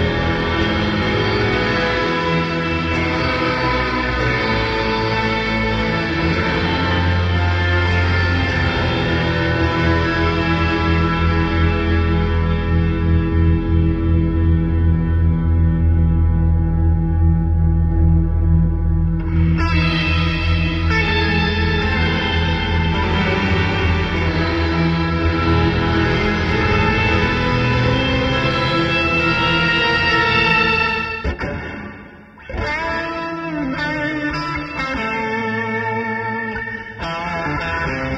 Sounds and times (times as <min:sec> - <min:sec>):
Effects unit: 0:00.0 - 0:38.1
Guitar: 0:00.0 - 0:38.1.